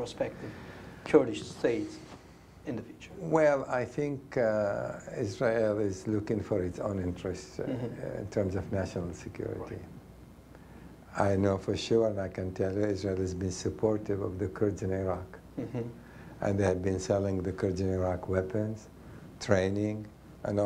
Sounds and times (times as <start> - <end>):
Speech: 0.0 - 0.4, 1.1 - 9.9, 11.1 - 20.6.